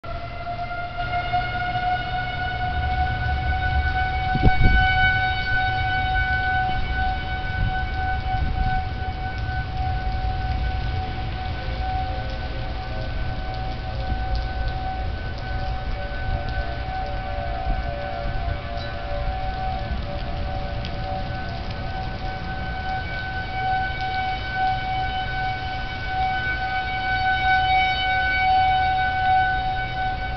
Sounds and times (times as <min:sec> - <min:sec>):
Civil defense siren: 0:00.0 - 0:30.3
Train horn: 0:00.1 - 0:30.3.